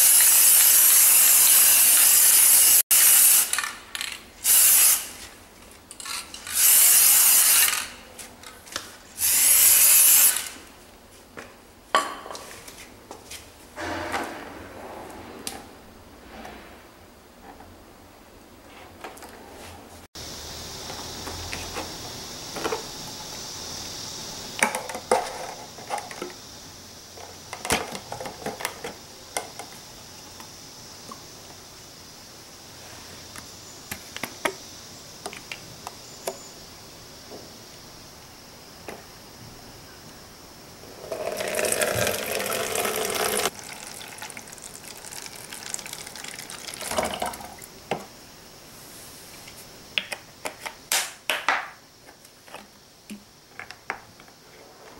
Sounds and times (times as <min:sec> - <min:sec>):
Water tap, faucet: 0:41.2 - 0:47.7
Water: 0:41.3 - 0:47.6.